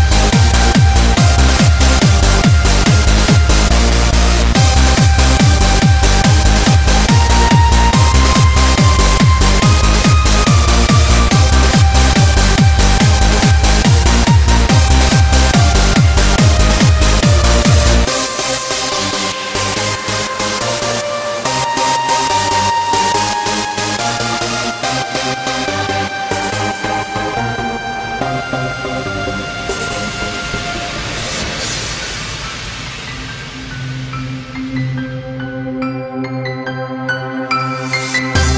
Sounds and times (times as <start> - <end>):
Pop music: 0.0 - 32.0, 35.8 - 38.5
Dubstep: 0.0 - 34.6
Electronic dance music: 0.0 - 35.8, 36.8 - 38.5
Techno: 0.0 - 35.8, 37.5 - 38.5
Electronica: 0.0 - 38.5
Exciting music: 0.0 - 38.5
House music: 0.0 - 38.5.